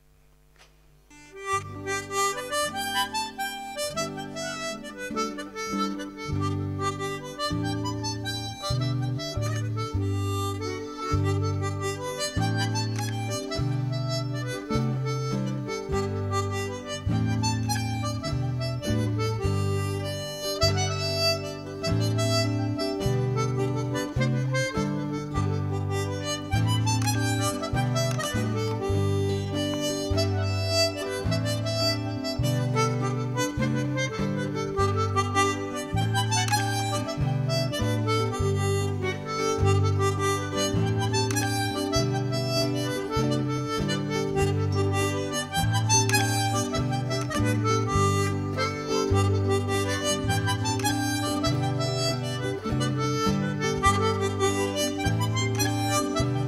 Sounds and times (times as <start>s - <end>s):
Folk music: 1.2s - 56.4s
Happy music: 1.3s - 56.4s.